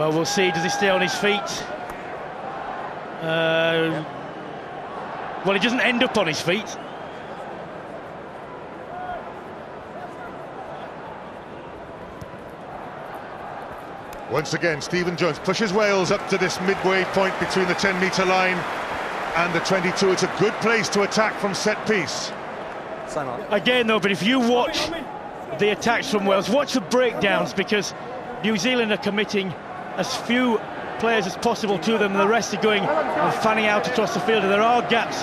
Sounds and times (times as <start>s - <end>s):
Speech: 0.0s - 1.7s, 5.5s - 6.8s, 14.3s - 18.6s, 19.4s - 22.4s, 23.1s - 35.2s.